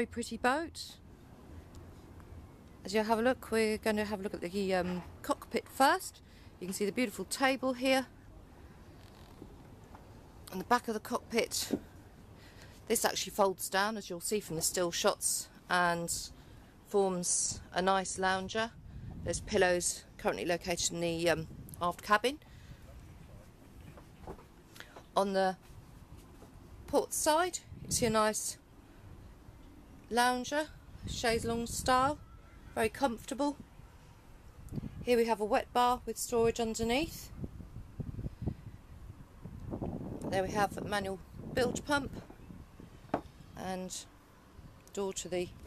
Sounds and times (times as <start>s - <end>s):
Speech: 0.0s - 1.0s, 2.8s - 8.1s, 10.5s - 11.8s, 12.9s - 22.4s, 25.2s - 25.6s, 26.9s - 28.6s, 30.1s - 32.2s, 32.8s - 33.6s, 35.1s - 37.3s, 40.3s - 42.2s, 43.6s - 44.1s, 44.9s - 45.6s.